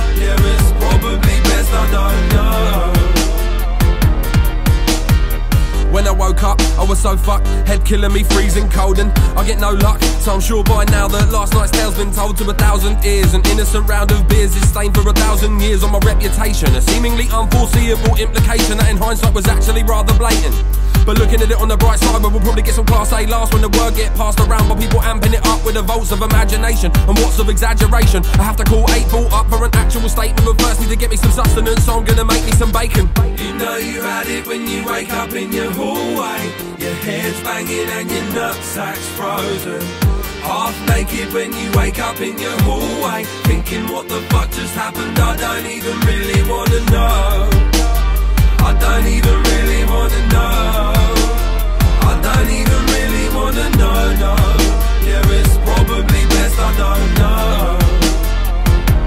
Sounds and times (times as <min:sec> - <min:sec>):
Music: 0:00.0 - 0:59.0.